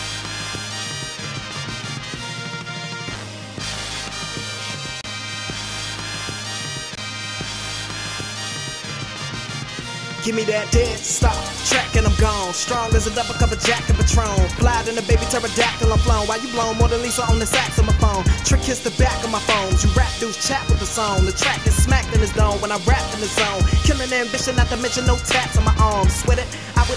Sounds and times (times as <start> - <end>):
Pop music: 0.0 - 26.9.